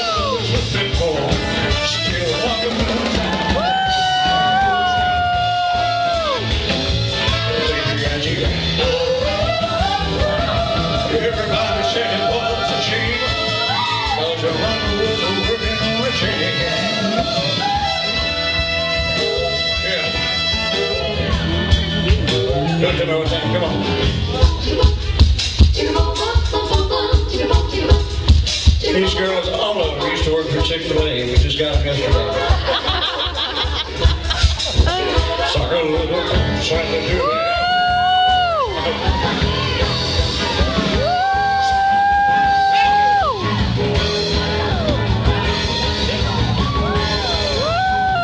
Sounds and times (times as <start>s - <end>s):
Rock and roll: 0.0s - 48.2s
Singing: 7.3s - 18.3s, 24.2s - 32.8s.